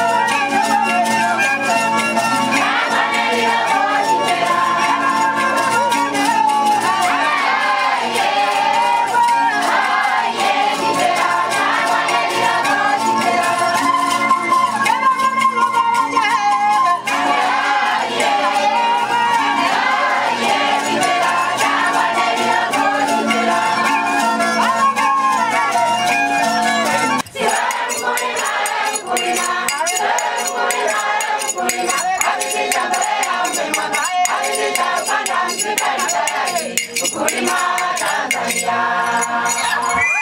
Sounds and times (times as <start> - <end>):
Music: 0.0 - 40.2.